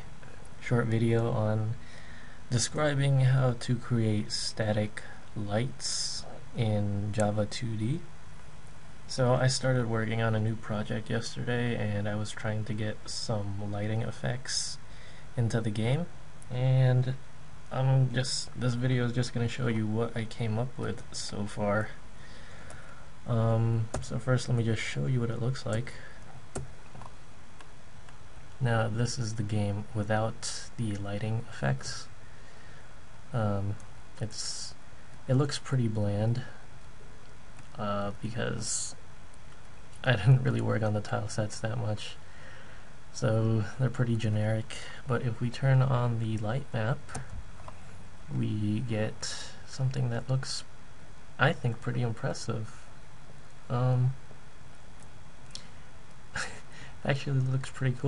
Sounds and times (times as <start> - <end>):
Speech: 0.6 - 1.8, 2.5 - 8.1, 9.1 - 14.8, 15.4 - 22.0, 23.2 - 26.2, 28.6 - 32.1, 33.3 - 36.6, 37.7 - 39.0, 40.0 - 42.2, 43.1 - 47.3, 48.3 - 50.7, 51.4 - 52.9, 53.7 - 54.2, 56.4 - 58.0.